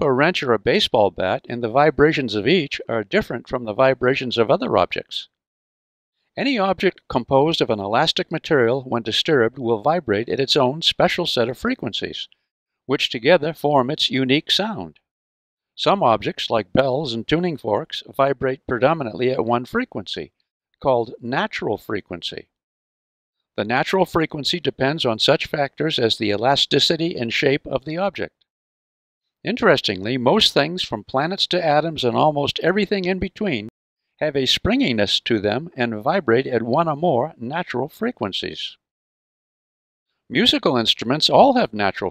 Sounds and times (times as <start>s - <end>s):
Speech: 0.0s - 5.4s, 6.4s - 15.1s, 15.8s - 22.6s, 23.6s - 28.4s, 29.4s - 38.8s, 40.3s - 42.1s.